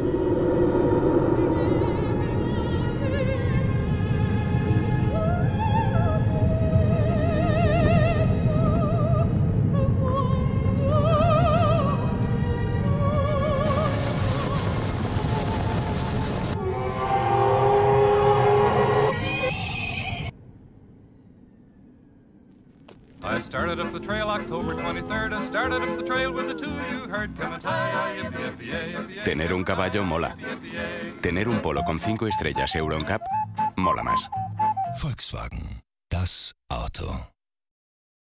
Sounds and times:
Music: 0:23.3 - 0:35.1.

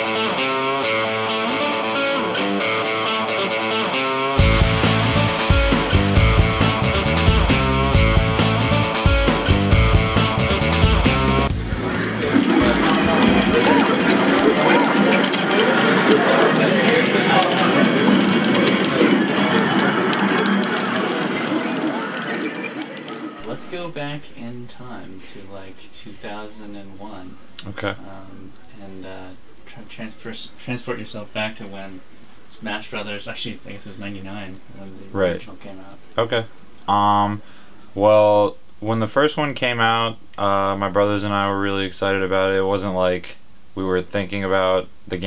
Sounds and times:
Speech: 0:12.6 - 0:18.2, 0:23.4 - 0:37.4, 0:38.0 - 0:45.2.

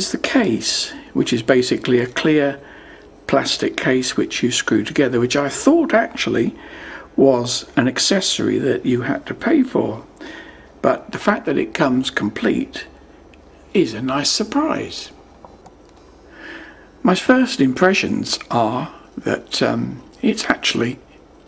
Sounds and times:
Speech: 0:00.0 - 0:02.6, 0:03.3 - 0:10.1, 0:10.8 - 0:13.0, 0:13.7 - 0:15.2, 0:17.0 - 0:21.1.

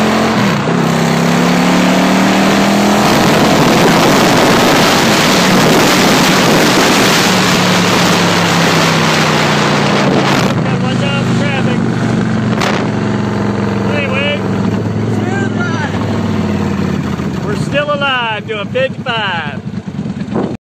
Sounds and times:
Speech: 0:10.6 - 0:11.8, 0:13.9 - 0:14.4, 0:15.2 - 0:16.0, 0:17.5 - 0:19.6.

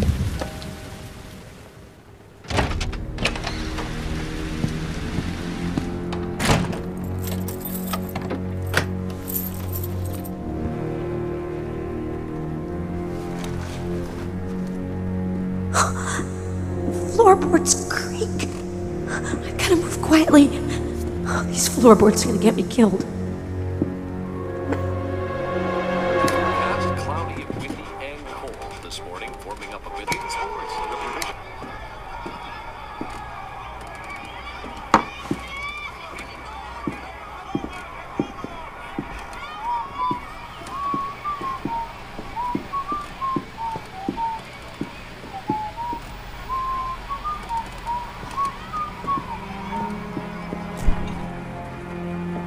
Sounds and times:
Music: 0:00.0 - 0:52.4.

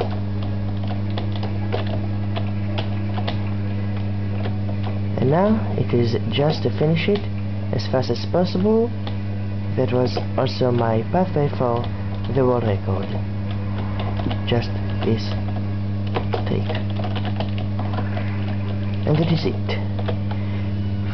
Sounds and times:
Speech: 0:05.2 - 0:09.0, 0:09.8 - 0:13.2, 0:14.5 - 0:15.4, 0:16.5 - 0:16.8, 0:19.1 - 0:19.9.

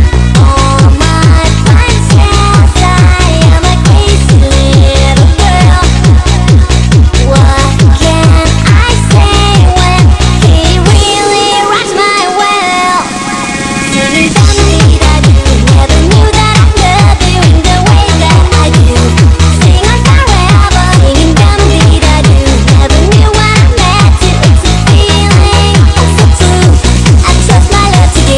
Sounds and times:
Child singing: 0:00.0 - 0:28.3
Music: 0:00.0 - 0:28.3.

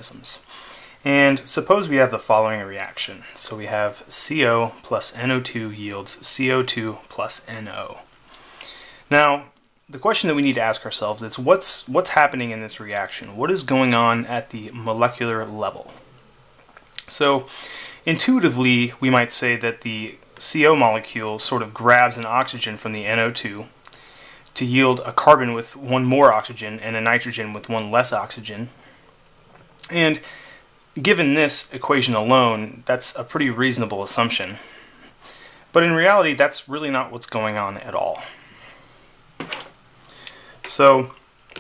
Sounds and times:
Speech: 0:00.0 - 0:08.1, 0:09.1 - 0:16.0, 0:17.0 - 0:23.8, 0:24.6 - 0:28.8, 0:29.8 - 0:30.3, 0:31.0 - 0:34.7, 0:35.7 - 0:38.4, 0:40.7 - 0:41.6.

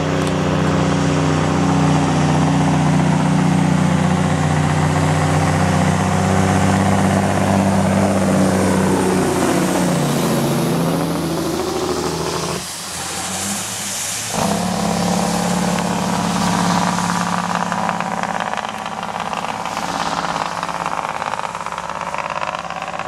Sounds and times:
Medium engine (mid frequency): 0:00.0 - 0:23.0
Truck: 0:00.0 - 0:23.0.

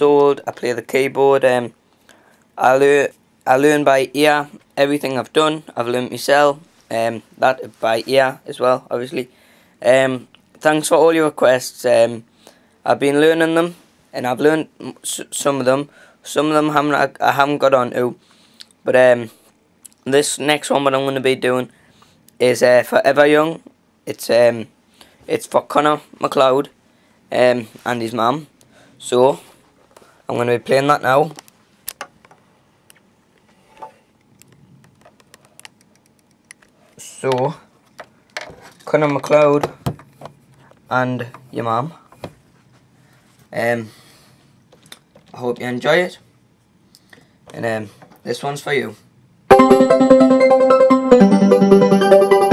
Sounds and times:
Speech: 0:00.0 - 0:01.8, 0:02.6 - 0:12.3, 0:12.9 - 0:18.2, 0:18.9 - 0:19.4, 0:20.0 - 0:21.7, 0:22.4 - 0:24.7, 0:25.3 - 0:29.5, 0:30.3 - 0:31.4, 0:37.0 - 0:37.7, 0:38.9 - 0:39.8, 0:40.9 - 0:42.0, 0:43.5 - 0:43.9, 0:45.3 - 0:46.3, 0:47.5 - 0:49.1.

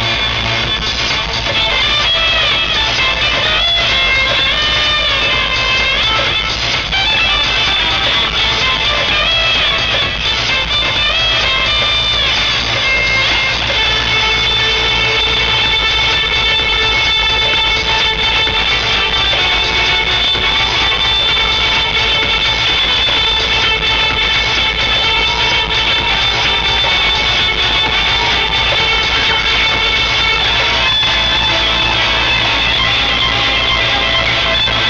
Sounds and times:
Musical instrument: 0:00.0 - 0:34.8.

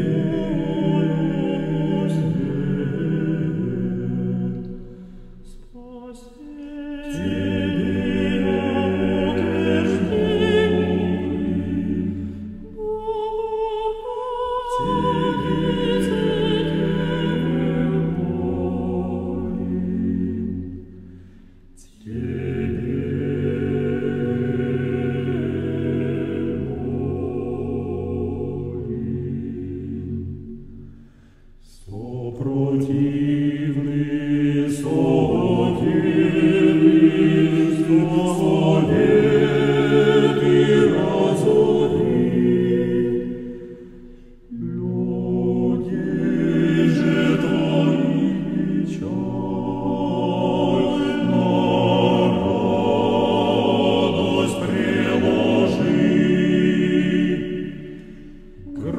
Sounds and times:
Mantra: 0:00.0 - 0:04.8, 0:05.4 - 0:20.4, 0:21.8 - 0:30.0, 0:31.6 - 0:43.5, 0:44.5 - 0:58.0, 0:58.6 - 0:58.9.

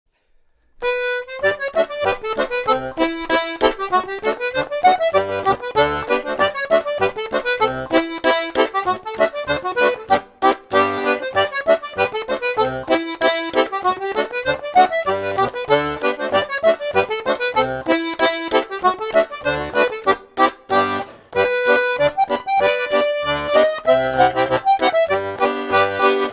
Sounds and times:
Accordion: 0:00.8 - 0:26.3.

